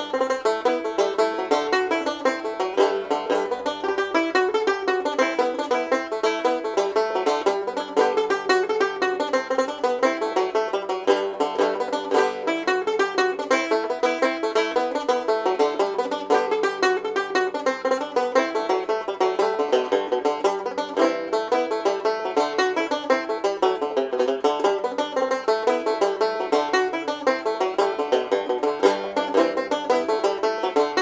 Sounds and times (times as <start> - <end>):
Banjo: 0.0 - 31.0.